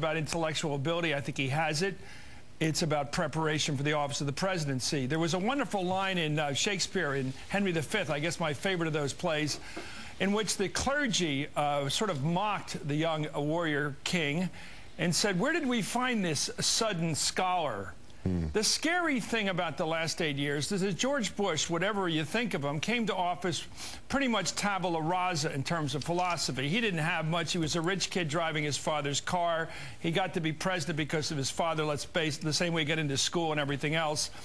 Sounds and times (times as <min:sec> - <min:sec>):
Male speech, man speaking: 0:00.0 - 0:02.0, 0:02.6 - 0:09.6, 0:10.2 - 0:34.3
Narration, monologue: 0:00.0 - 0:34.4.